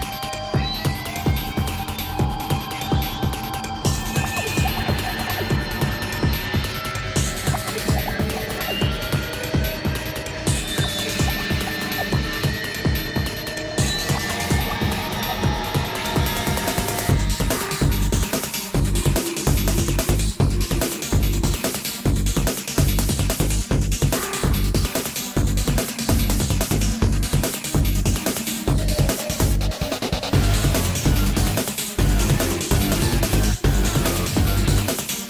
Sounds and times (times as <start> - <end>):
Music: 0.0 - 35.3.